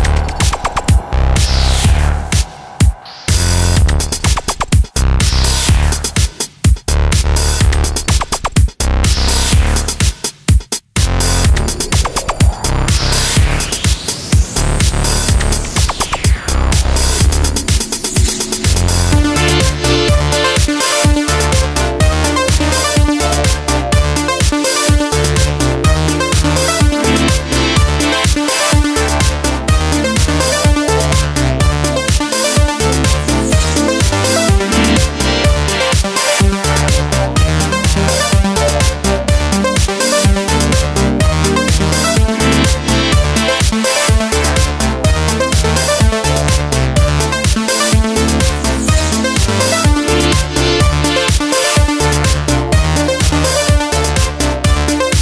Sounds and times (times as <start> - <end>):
Soundtrack music: 0.0 - 6.6, 11.0 - 55.2
Electronic music: 0.0 - 8.4, 9.0 - 10.2, 11.0 - 55.2.